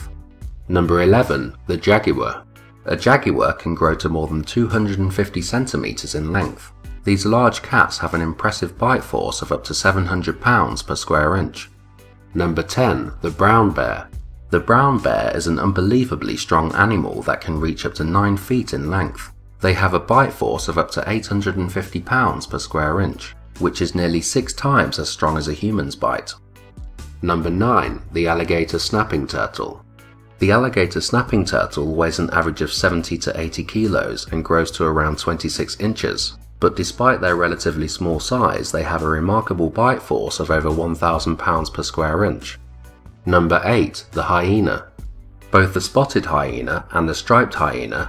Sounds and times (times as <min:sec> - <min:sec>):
Music: 0:00.0 - 0:48.0
Speech: 0:00.7 - 0:11.7, 0:12.3 - 0:26.4, 0:27.2 - 0:29.8, 0:30.4 - 0:42.6, 0:43.2 - 0:44.9, 0:45.5 - 0:48.0.